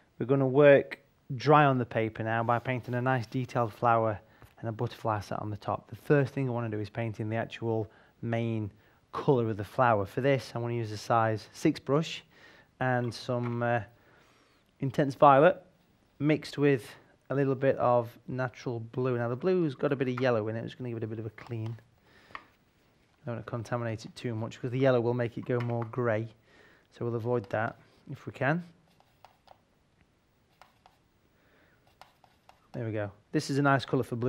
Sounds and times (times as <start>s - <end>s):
Speech: 0.2s - 13.9s, 14.8s - 21.8s, 23.2s - 28.8s, 32.8s - 34.2s.